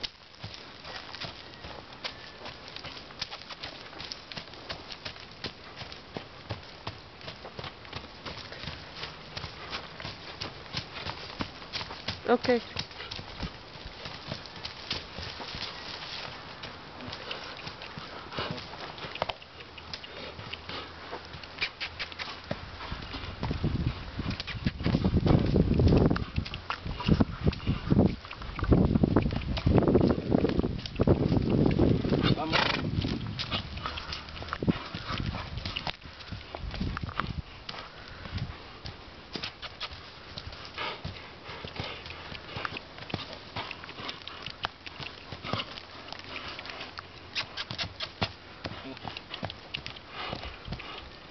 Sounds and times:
Clip-clop: 0.0s - 51.3s.

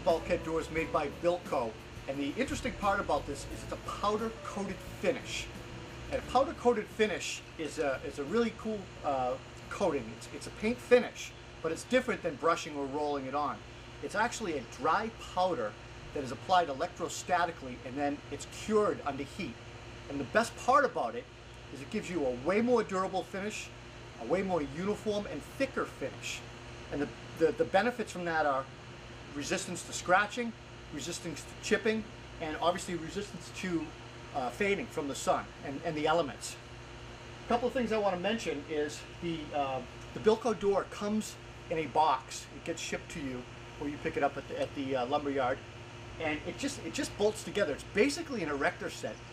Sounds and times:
Speech: 0.0s - 28.7s, 29.3s - 36.6s, 37.5s - 45.6s, 46.2s - 49.2s.

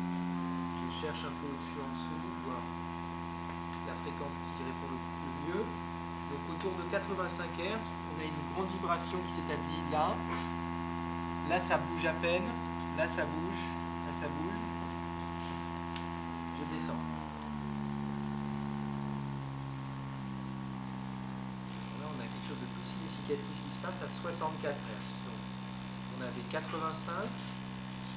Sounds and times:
Speech: 0.9s - 2.8s, 3.8s - 10.5s, 11.4s - 14.8s, 16.6s - 17.1s, 21.8s - 27.5s.

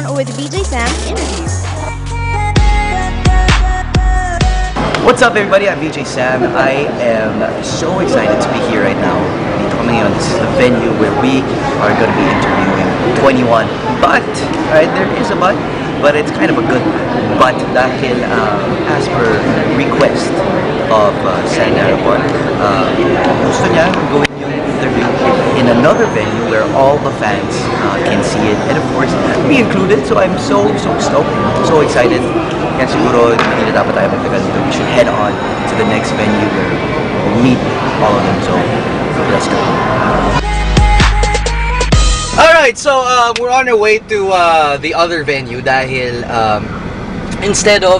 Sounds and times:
Inside, public space: 0.0s - 47.9s
Speech: 5.1s - 36.7s, 42.4s - 46.7s, 47.4s - 47.9s.

